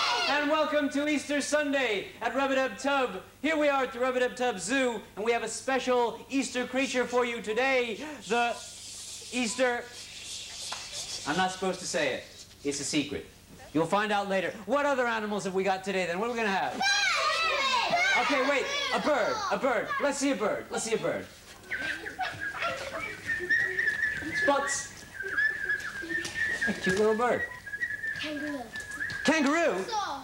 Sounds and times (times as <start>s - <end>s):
Child speech, kid speaking: 16.8s - 20.4s, 28.2s - 28.8s, 29.7s - 30.2s.